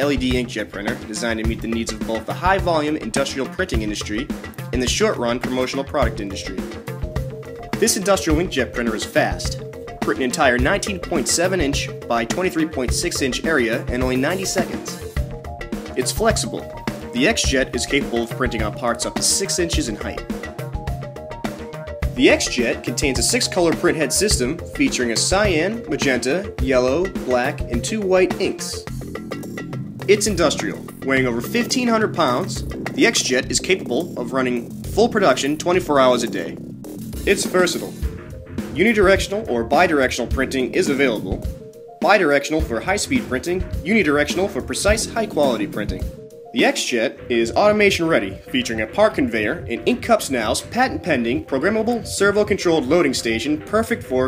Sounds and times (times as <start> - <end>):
Speech: 0.0 - 6.8, 7.8 - 15.1, 16.0 - 20.3, 22.2 - 28.9, 30.1 - 36.6, 37.3 - 38.1, 38.8 - 54.2
Music: 0.0 - 54.2.